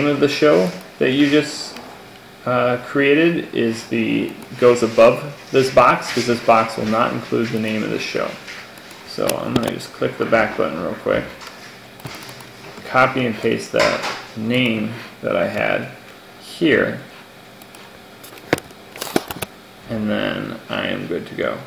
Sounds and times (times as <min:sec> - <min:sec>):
Speech: 0:00.0 - 0:01.8, 0:02.4 - 0:08.5, 0:09.1 - 0:11.4, 0:12.8 - 0:17.1, 0:19.8 - 0:21.6.